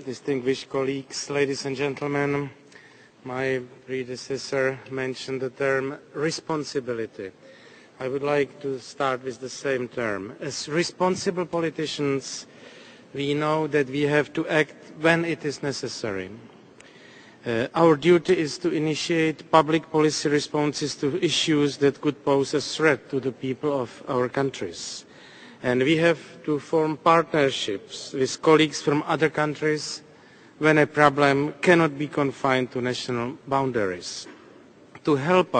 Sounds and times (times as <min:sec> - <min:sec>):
Male speech, man speaking: 0:00.0 - 0:02.6, 0:03.2 - 0:07.4, 0:08.0 - 0:12.5, 0:13.2 - 0:16.4, 0:17.4 - 0:25.0, 0:25.6 - 0:34.3, 0:35.0 - 0:35.6
Narration, monologue: 0:00.0 - 0:35.6.